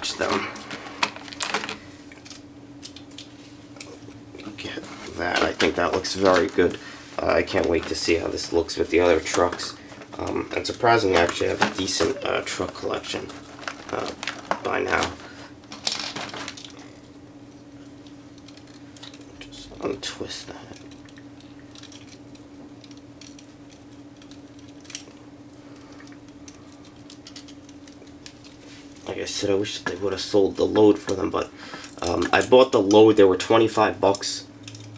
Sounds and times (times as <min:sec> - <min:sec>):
Speech: 0:00.0 - 0:00.5, 0:04.4 - 0:15.2, 0:19.4 - 0:20.8, 0:29.0 - 0:34.5.